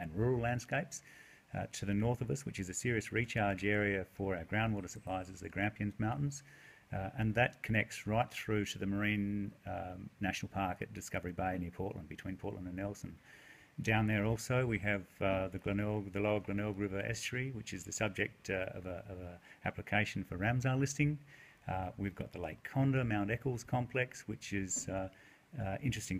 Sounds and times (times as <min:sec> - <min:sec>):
Speech: 0:00.0 - 0:13.2, 0:13.8 - 0:26.1.